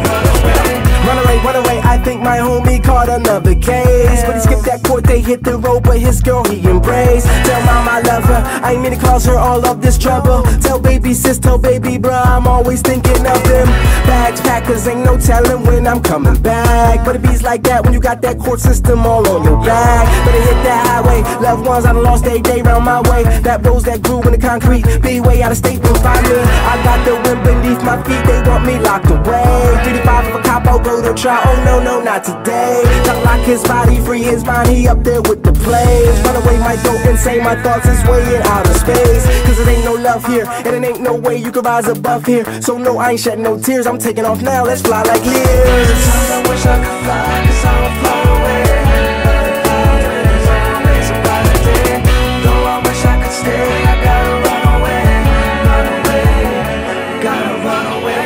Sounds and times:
Music: 0:00.0 - 0:58.2.

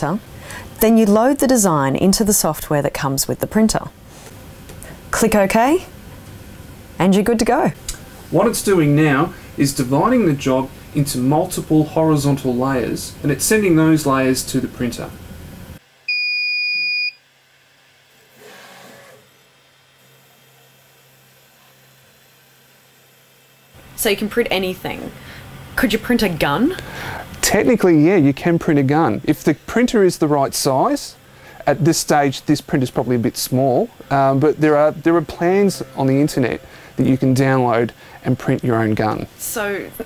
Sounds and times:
Speech: 0:00.8 - 0:03.9, 0:07.0 - 0:15.2, 0:27.4 - 0:40.0.

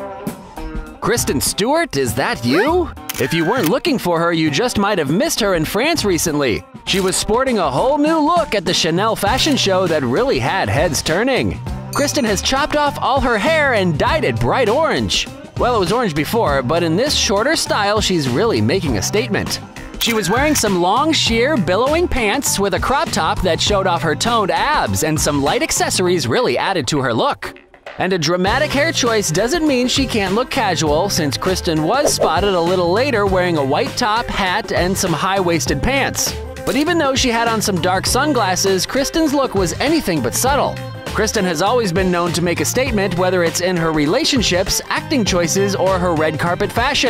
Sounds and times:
Music: 0:00.0 - 0:47.0
Speech: 0:01.0 - 0:47.0.

